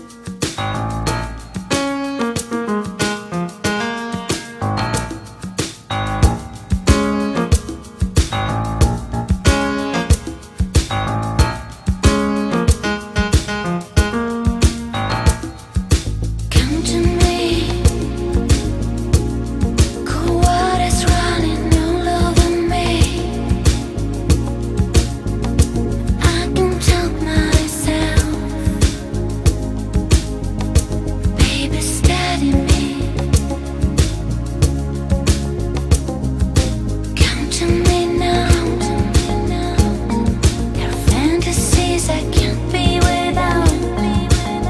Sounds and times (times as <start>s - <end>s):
Soul music: 0.0s - 44.6s.